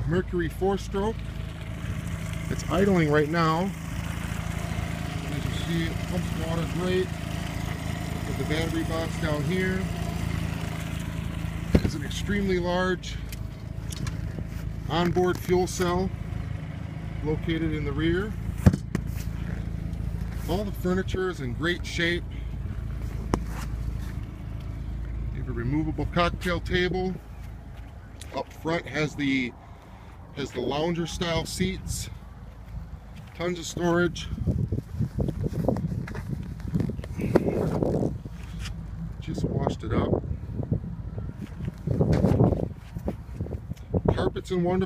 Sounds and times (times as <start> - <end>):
Speech: 0.0 - 1.2, 2.5 - 3.8, 5.3 - 7.1, 8.2 - 9.9, 11.8 - 13.2, 14.9 - 16.1, 17.2 - 18.4, 20.4 - 22.2, 25.4 - 27.2, 28.3 - 29.5, 30.4 - 32.2, 33.4 - 34.3, 39.2 - 40.2, 44.1 - 44.8.